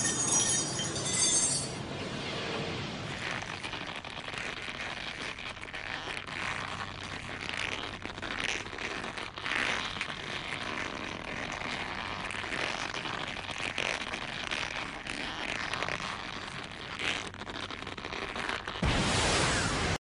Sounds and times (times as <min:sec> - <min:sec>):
Zipper (clothing): 0:00.0 - 0:01.8, 0:03.0 - 0:18.8.